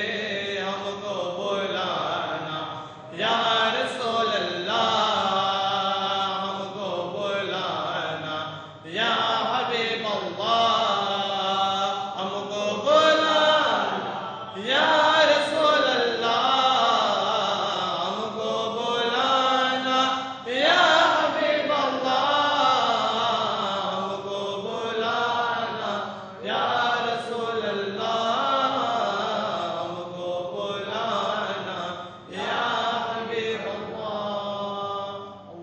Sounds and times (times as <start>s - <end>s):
Chant: 0.0s - 35.6s.